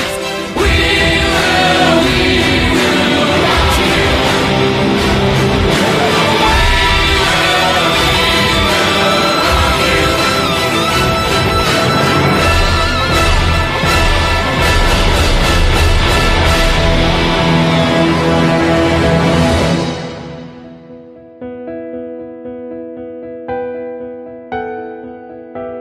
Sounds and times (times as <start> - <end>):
Theme music: 0.0 - 21.4.